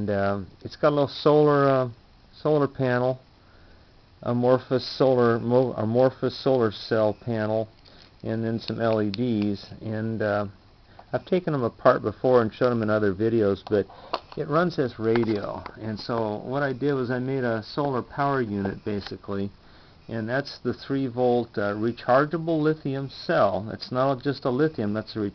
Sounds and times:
Speech: 0.0s - 3.2s, 4.2s - 25.3s.

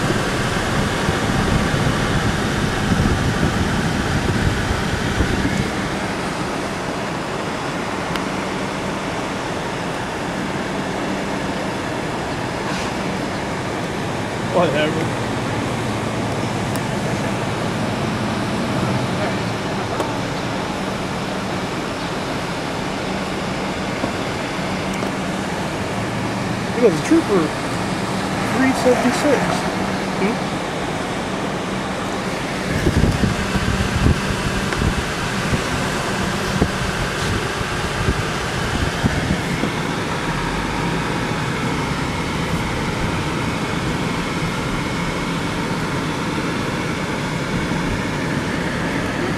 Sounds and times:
Car: 0.0s - 49.3s
Idling: 0.0s - 49.3s
Medium engine (mid frequency): 0.0s - 49.3s.

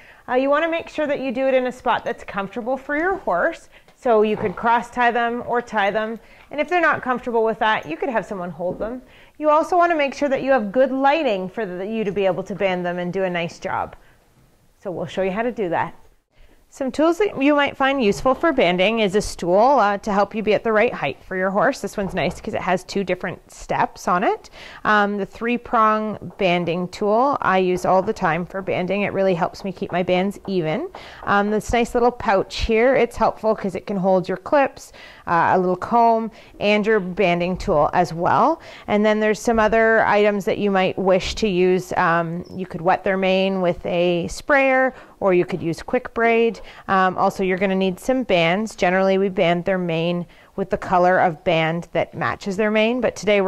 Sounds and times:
Speech: 0.3s - 14.0s, 14.8s - 16.0s, 16.7s - 53.4s.

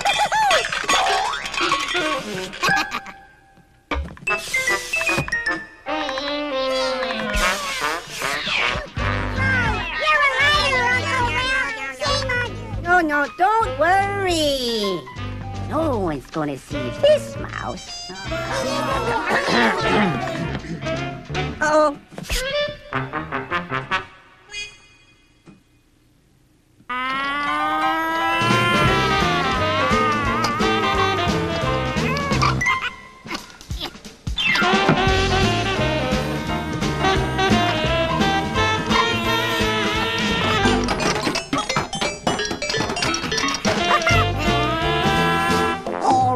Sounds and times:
Music: 1.9s - 24.4s, 27.9s - 46.3s.

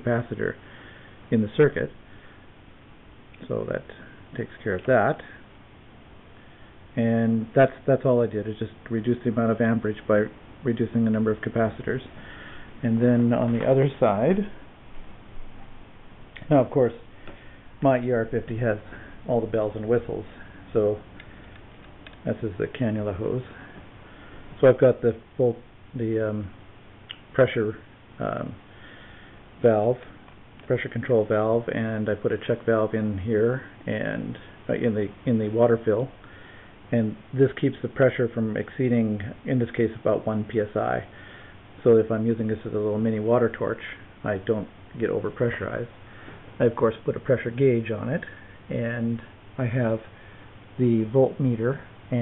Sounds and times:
Speech: 0.0s - 0.6s, 1.3s - 2.0s, 3.4s - 5.4s, 6.9s - 12.2s, 12.8s - 14.6s, 16.4s - 17.1s, 17.8s - 21.1s, 22.2s - 23.6s, 24.6s - 28.6s, 29.6s - 36.2s, 36.9s - 41.2s, 41.8s - 46.0s, 46.6s - 50.1s, 50.8s - 52.2s.

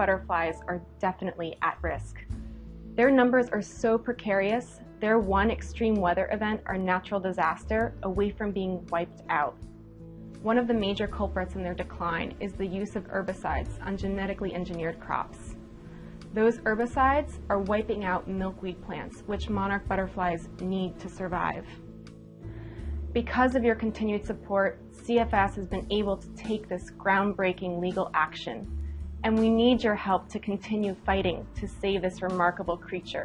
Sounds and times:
Speech: 0.0s - 2.3s, 3.0s - 9.6s, 10.4s - 15.5s, 16.3s - 21.8s, 23.2s - 33.2s
Music: 0.0s - 33.2s.

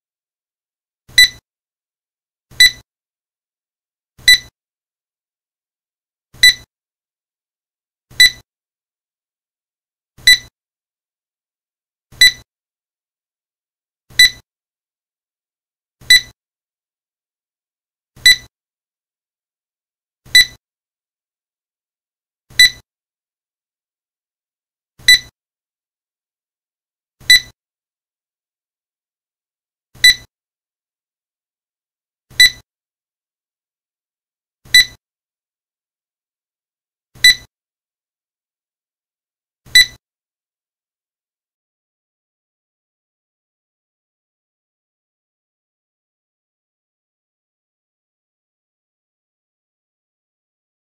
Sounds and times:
Beep, bleep: 1.2s - 1.4s, 2.5s - 2.9s, 4.2s - 4.6s, 6.4s - 6.7s, 8.1s - 8.5s, 10.2s - 10.5s, 12.2s - 12.5s, 14.2s - 14.5s, 16.1s - 16.4s, 18.2s - 18.5s, 20.3s - 20.6s, 22.5s - 22.9s, 25.0s - 25.4s, 27.3s - 27.6s, 30.0s - 30.3s, 32.3s - 32.7s, 34.7s - 35.0s, 37.2s - 37.5s, 39.8s - 40.0s.

